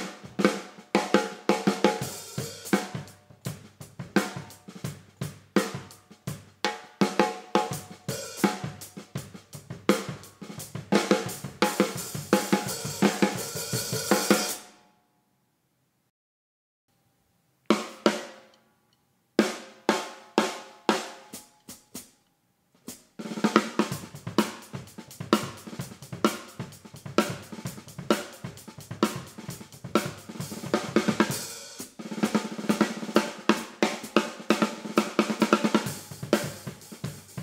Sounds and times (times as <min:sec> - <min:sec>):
Snare drum: 0:00.0 - 0:14.7, 0:17.7 - 0:18.5, 0:19.4 - 0:22.1, 0:22.8 - 0:37.4.